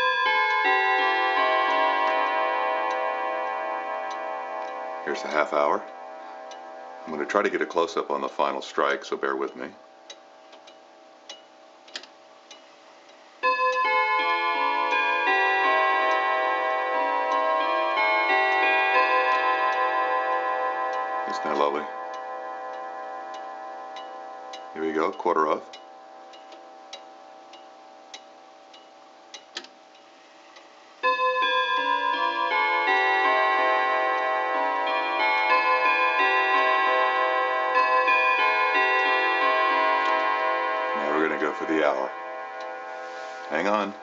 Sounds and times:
Speech: 5.1s - 5.9s, 7.1s - 9.8s, 21.3s - 21.9s, 24.8s - 25.7s, 41.0s - 42.1s, 43.5s - 44.0s
Tick-tock: 9.4s - 16.2s, 20.9s - 33.1s.

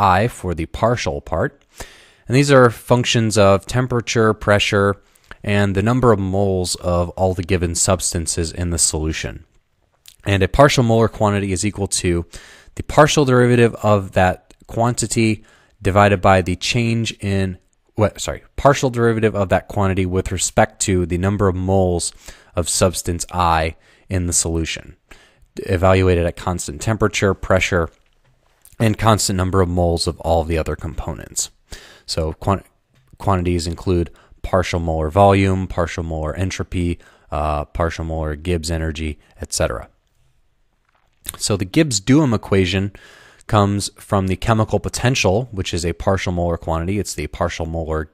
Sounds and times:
Speech: 0.0s - 1.6s, 2.3s - 9.5s, 10.1s - 25.0s, 25.6s - 28.0s, 28.7s - 40.0s, 41.3s - 48.1s.

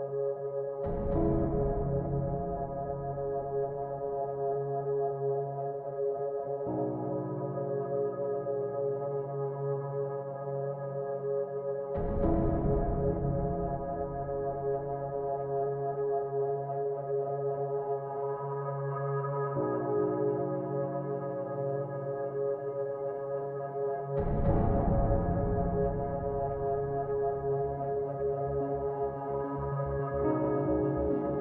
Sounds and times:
Music: 0.0s - 31.4s.

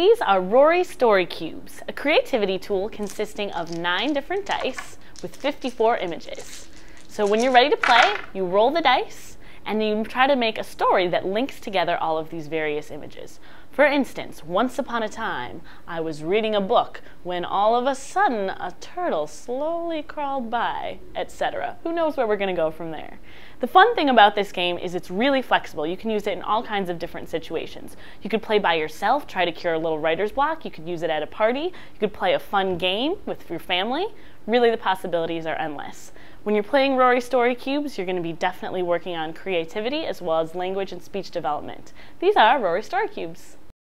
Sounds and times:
Female speech, woman speaking: 0.0s - 43.6s.

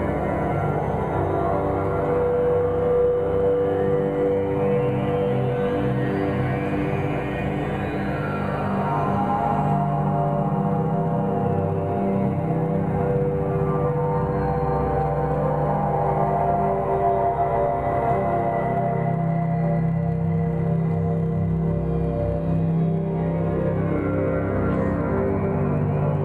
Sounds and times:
Ambient music: 0.0s - 26.2s.

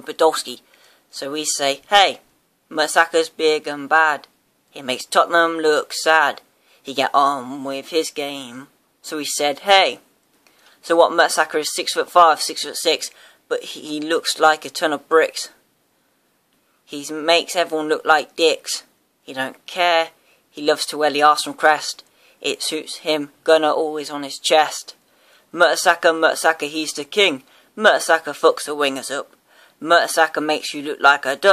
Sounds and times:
Speech: 0.0s - 10.1s, 10.8s - 15.6s, 16.9s - 31.5s.

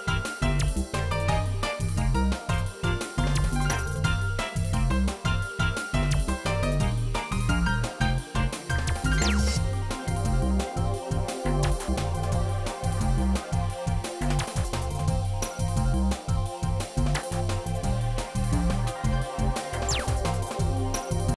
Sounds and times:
Electronic music: 0.0s - 21.3s.

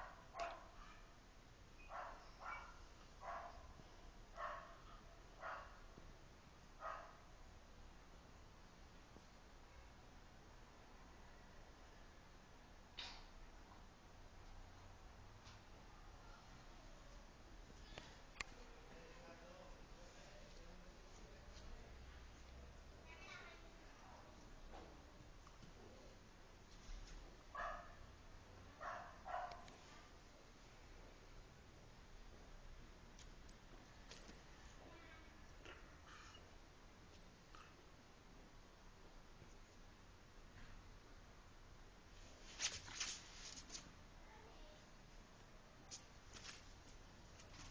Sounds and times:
Dog: 0.0s - 1.1s, 1.8s - 3.7s, 4.4s - 5.8s, 6.8s - 7.2s, 27.6s - 28.0s, 28.8s - 29.7s.

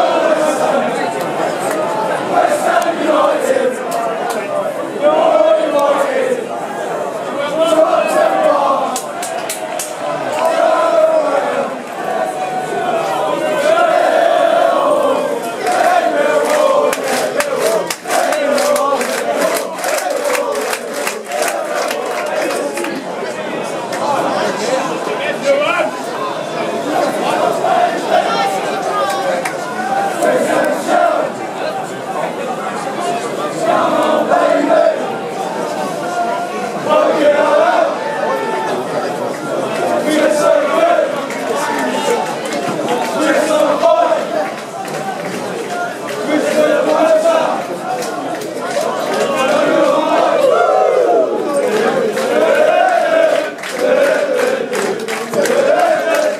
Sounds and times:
Speech: 0.0s - 56.3s.

